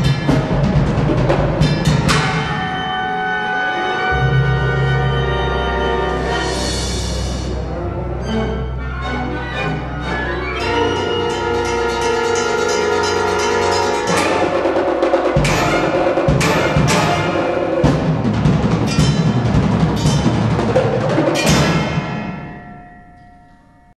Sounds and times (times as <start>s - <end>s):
Percussion: 0.0s - 23.9s.